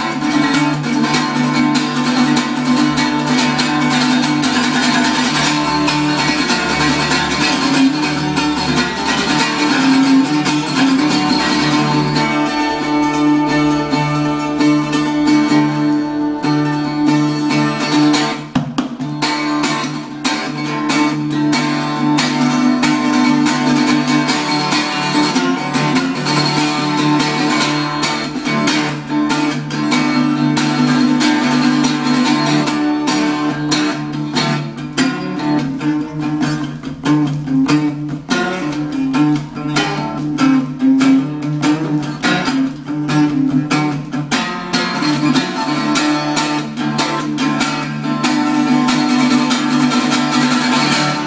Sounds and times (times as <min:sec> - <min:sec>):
Acoustic guitar: 0:00.0 - 0:51.2
Strum: 0:00.0 - 0:51.2.